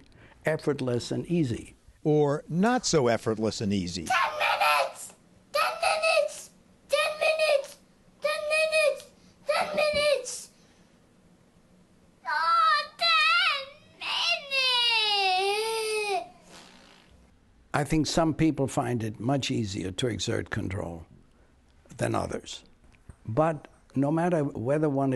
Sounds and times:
Crying, sobbing: 4.1 - 7.6, 9.5 - 10.4, 12.3 - 16.4
Child speech, kid speaking: 4.1 - 10.6, 12.2 - 16.3.

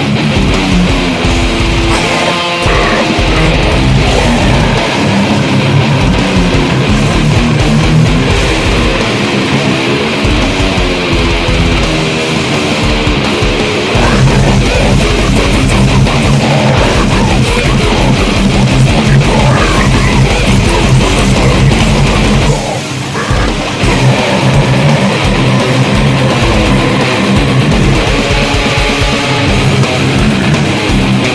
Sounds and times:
Electric guitar: 0.0 - 31.3
Strum: 0.0 - 31.3.

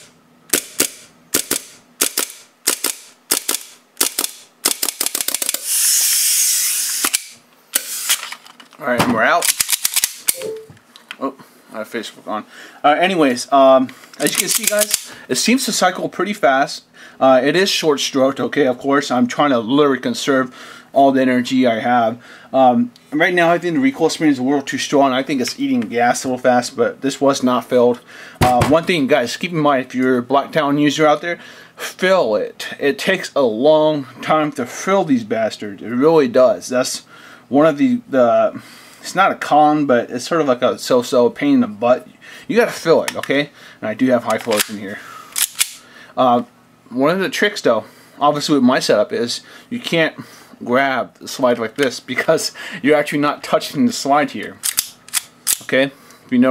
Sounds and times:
Speech: 8.8 - 9.5, 11.2 - 45.0, 46.2 - 54.6, 55.7 - 56.5.

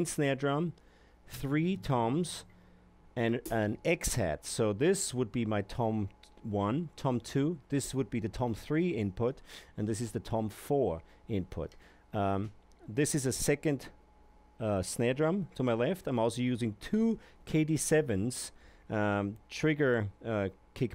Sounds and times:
Speech: 0.0 - 2.5, 3.2 - 14.0, 14.6 - 20.9.

